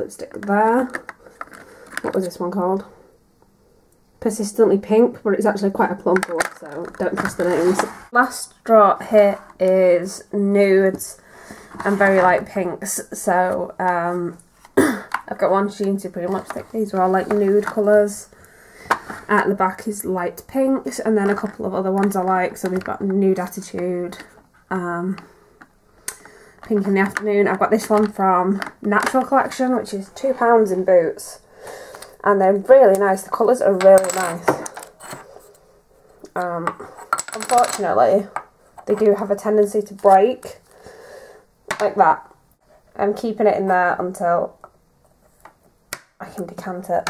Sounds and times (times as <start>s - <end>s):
Speech: 0.0s - 1.0s, 2.1s - 3.0s, 4.2s - 11.2s, 11.8s - 14.4s, 15.3s - 18.3s, 19.3s - 25.3s, 26.7s - 31.4s, 32.2s - 34.7s, 36.4s - 40.6s, 41.8s - 42.3s, 43.0s - 44.6s, 46.2s - 47.1s
Inside, small room: 0.0s - 47.1s.